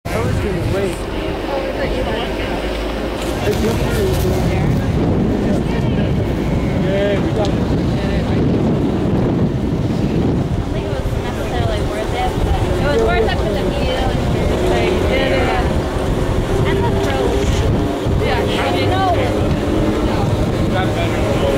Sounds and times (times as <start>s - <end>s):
Outside, rural or natural: 0.0s - 21.5s.